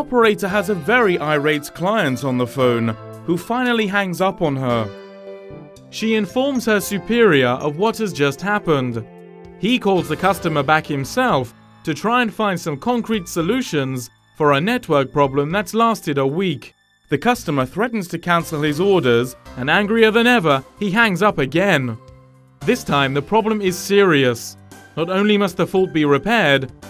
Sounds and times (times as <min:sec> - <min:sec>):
Speech: 0:00.0 - 0:04.9, 0:06.0 - 0:22.0, 0:22.6 - 0:26.7
Music: 0:00.0 - 0:26.9.